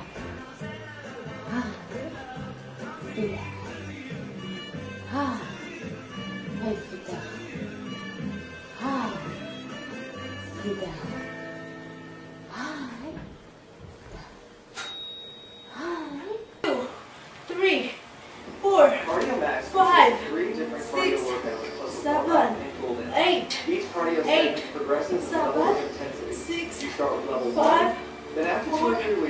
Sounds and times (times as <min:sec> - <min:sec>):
Female speech, woman speaking: 0:03.1 - 0:03.5, 0:05.1 - 0:05.6, 0:06.5 - 0:07.3, 0:08.8 - 0:09.4, 0:10.6 - 0:11.2, 0:12.5 - 0:13.3, 0:17.5 - 0:18.0, 0:18.6 - 0:29.2.